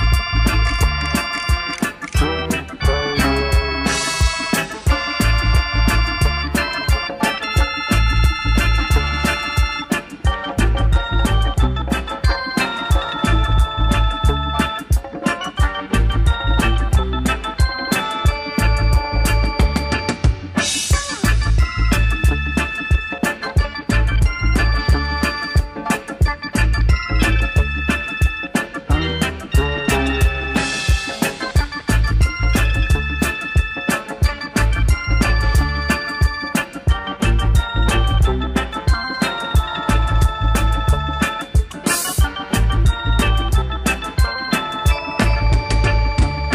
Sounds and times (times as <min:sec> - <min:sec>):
Music: 0:00.0 - 0:46.5.